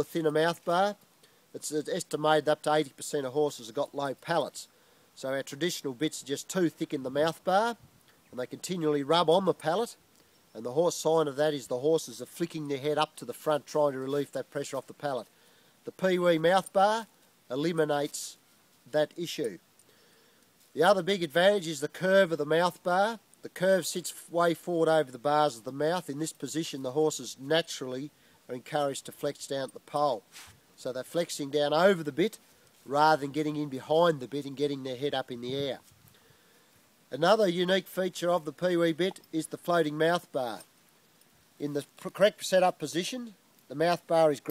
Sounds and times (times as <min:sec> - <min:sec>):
Speech: 0:00.0 - 0:01.0, 0:01.6 - 0:15.3, 0:15.9 - 0:19.6, 0:20.8 - 0:30.2, 0:30.8 - 0:35.9, 0:37.1 - 0:40.7, 0:41.6 - 0:44.5.